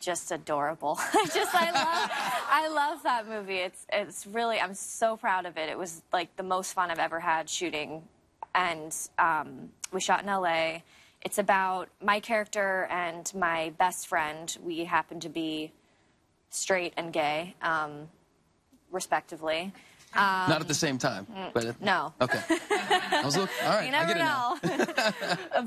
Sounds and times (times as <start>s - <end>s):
Female speech, woman speaking: 0.0s - 15.7s, 16.6s - 18.1s, 19.0s - 20.8s, 21.4s - 25.6s.